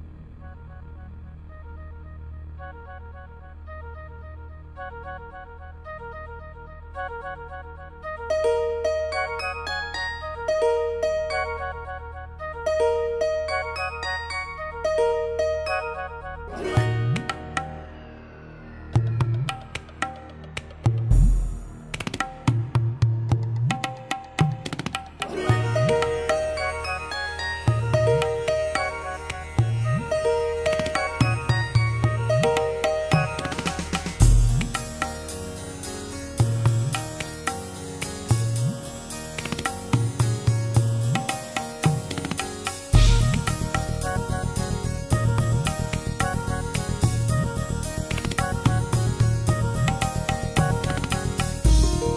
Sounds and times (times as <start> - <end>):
Music: 0.0 - 52.1.